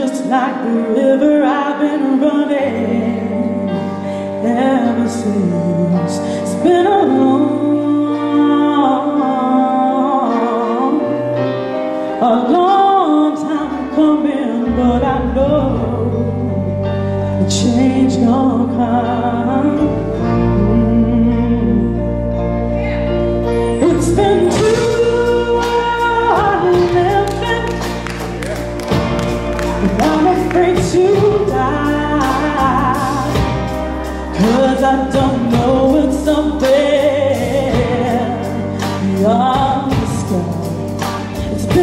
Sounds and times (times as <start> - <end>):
Soul music: 0.0 - 41.8
Rhythm and blues: 22.2 - 41.8.